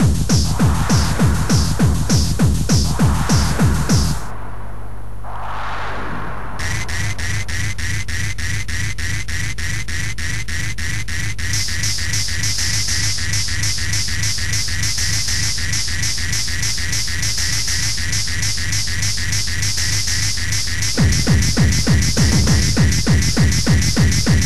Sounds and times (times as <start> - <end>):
Electronic dance music: 0.0 - 9.2, 11.5 - 24.4.